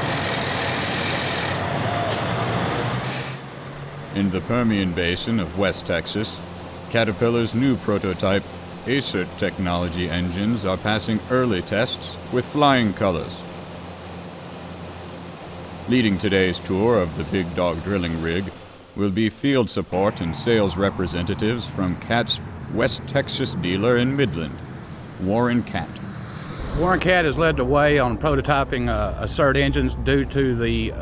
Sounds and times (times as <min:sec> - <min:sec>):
Heavy engine (low frequency): 0:00.0 - 0:31.0
Speech: 0:04.2 - 0:13.4, 0:15.9 - 0:24.6, 0:25.2 - 0:26.0, 0:26.7 - 0:31.0.